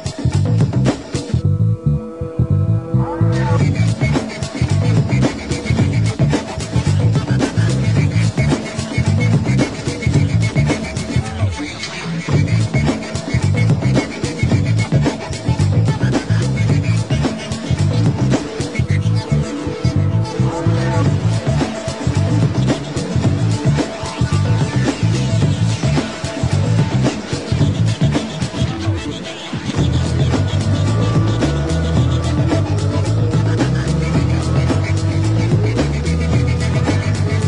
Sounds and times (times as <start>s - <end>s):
Music: 0.0s - 37.4s.